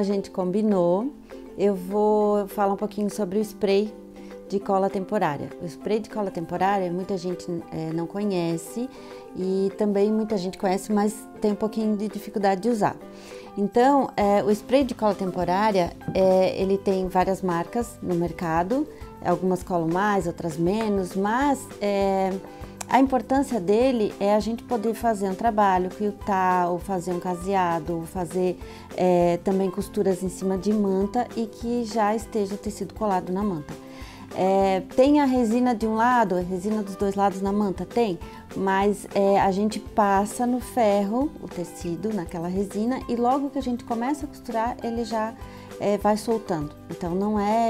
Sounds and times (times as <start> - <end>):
Speech: 0.0 - 3.9, 4.5 - 13.0, 13.6 - 47.6
Music: 0.0 - 47.6.